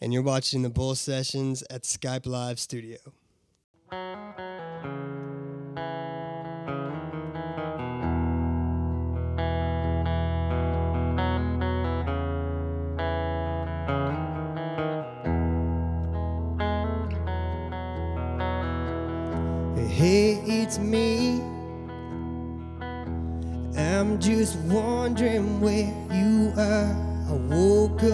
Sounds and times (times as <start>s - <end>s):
Effects unit: 3.8s - 28.1s
Music: 3.8s - 28.1s.